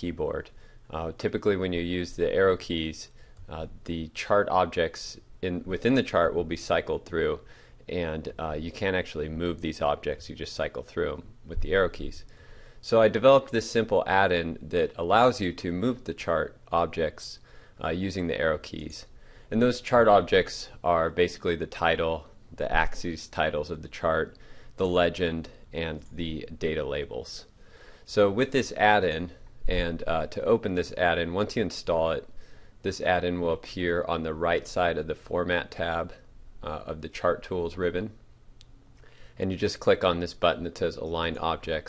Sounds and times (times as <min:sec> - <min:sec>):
Speech: 0:00.0 - 0:27.5, 0:28.1 - 0:38.2, 0:39.4 - 0:41.8.